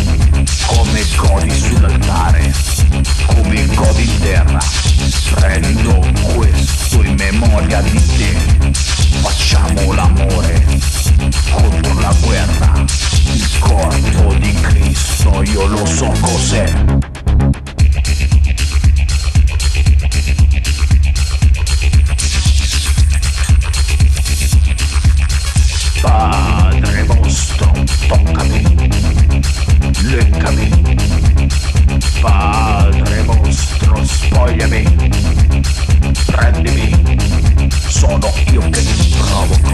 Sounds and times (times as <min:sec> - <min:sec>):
Music: 0:00.0 - 0:39.7.